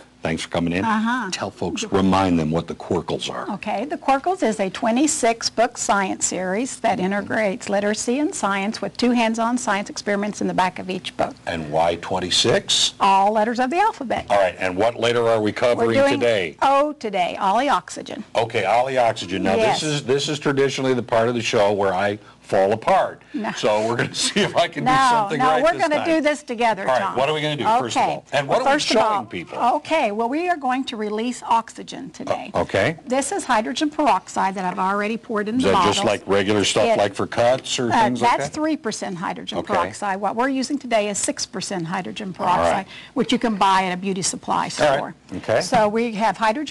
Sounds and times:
Speech: 14.2s - 16.4s, 23.7s - 26.1s, 32.3s - 32.9s, 35.6s - 38.6s.

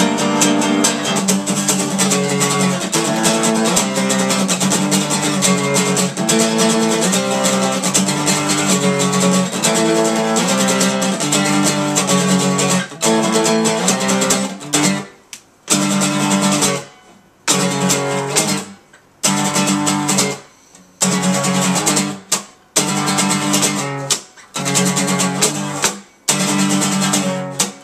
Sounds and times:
Music: 0.0s - 27.8s.

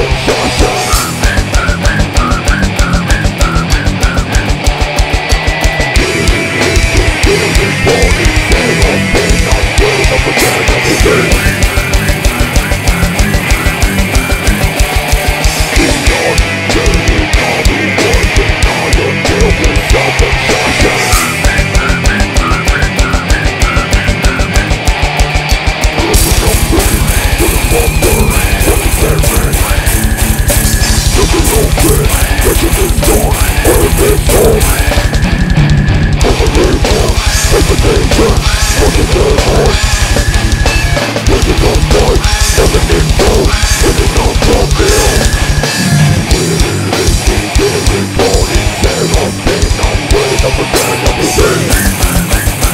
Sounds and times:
Angry music: 0.0s - 52.7s.

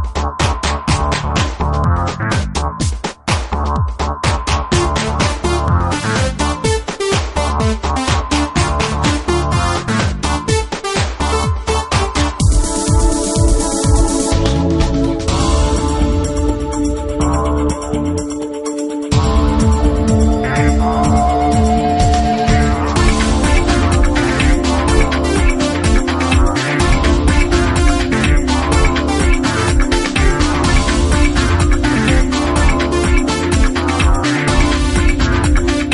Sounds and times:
Video game music: 0.1s - 35.9s.

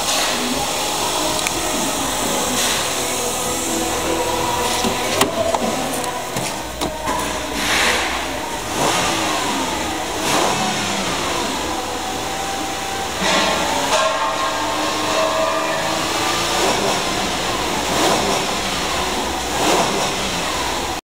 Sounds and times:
Medium engine (mid frequency): 0.0s - 21.0s
Vehicle: 0.0s - 21.0s.

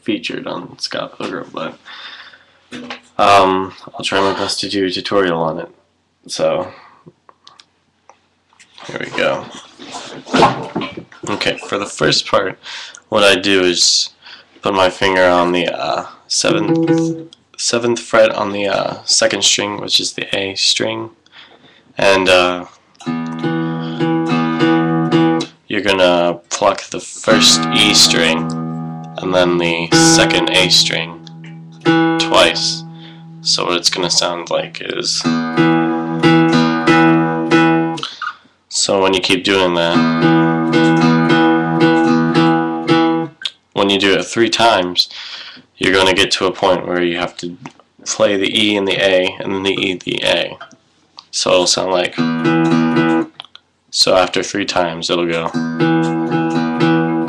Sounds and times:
Speech: 0.0s - 1.8s, 3.2s - 6.8s, 8.8s - 9.6s, 11.2s - 16.8s, 17.6s - 21.2s, 22.0s - 22.8s, 25.7s - 28.5s, 29.2s - 31.2s, 32.2s - 32.9s, 33.5s - 35.3s, 38.7s - 40.0s, 43.5s - 45.2s, 45.8s - 50.7s, 51.3s - 52.2s, 53.4s - 55.5s
Music: 16.5s - 17.3s, 23.0s - 25.5s, 27.3s - 38.0s, 40.0s - 43.3s, 52.2s - 53.3s, 55.5s - 57.2s.

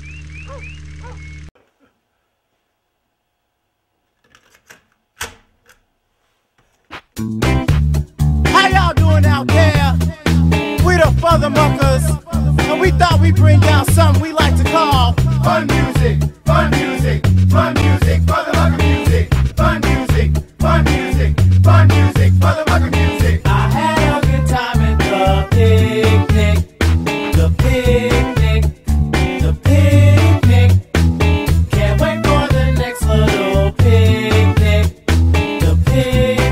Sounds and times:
Happy music: 7.2s - 36.5s.

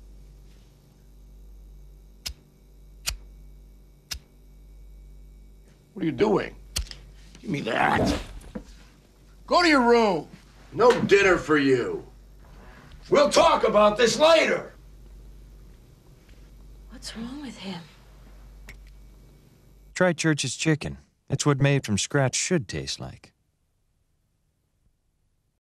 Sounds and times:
Speech: 6.0s - 6.6s, 7.4s - 8.2s, 9.5s - 12.1s, 13.1s - 14.8s, 20.0s - 23.3s.

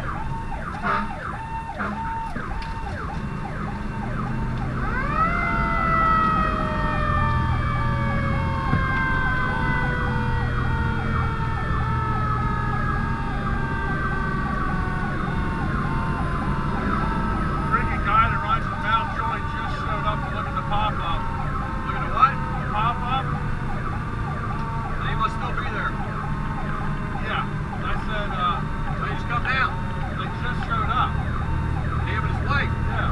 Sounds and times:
Engine: 0.0s - 33.1s
Vehicle: 0.0s - 33.1s.

